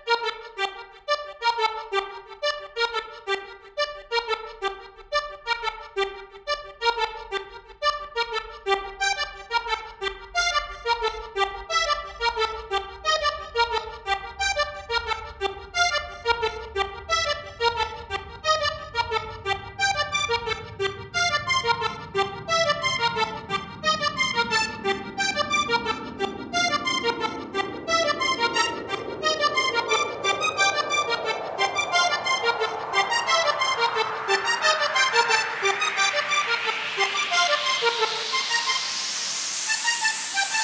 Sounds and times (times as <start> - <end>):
Accordion: 0.0 - 40.6
House music: 19.6 - 40.6
Dance music: 21.4 - 40.6
Electronic dance music: 21.4 - 40.6.